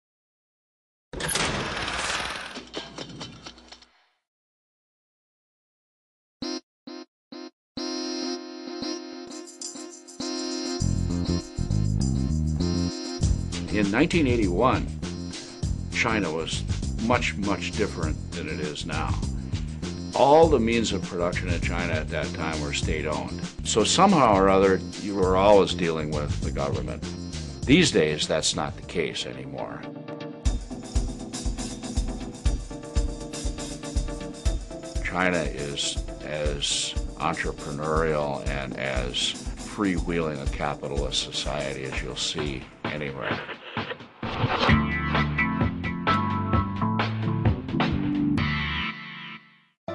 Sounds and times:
Music: 7.8 - 49.9.

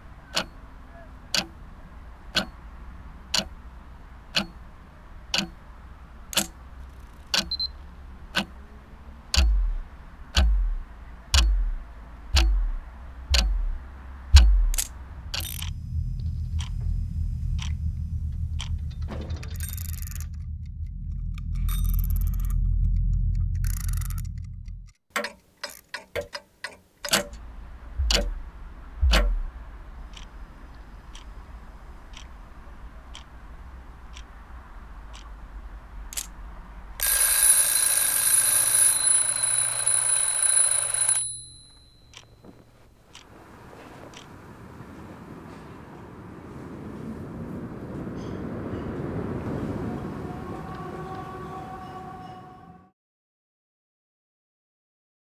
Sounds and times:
Tick-tock: 0.3 - 0.6, 1.3 - 1.6, 2.3 - 2.6, 3.3 - 3.6, 4.3 - 4.6, 5.3 - 5.6, 6.3 - 6.6, 7.3 - 7.7, 8.3 - 8.6, 9.3 - 11.8, 12.4 - 13.8, 14.4 - 18.8, 28.0 - 28.4, 29.0 - 29.5, 33.1 - 33.3.

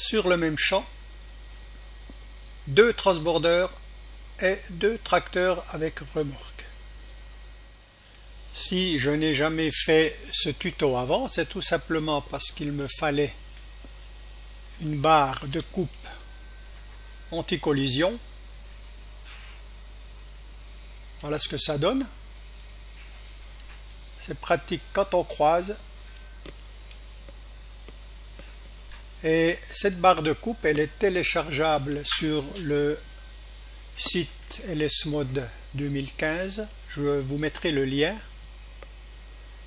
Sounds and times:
Speech: 0.0 - 1.0, 2.6 - 3.8, 4.4 - 6.8, 8.6 - 13.4, 14.7 - 16.2, 17.3 - 18.3, 21.2 - 22.2, 24.2 - 25.8, 29.2 - 33.1, 34.0 - 38.3.

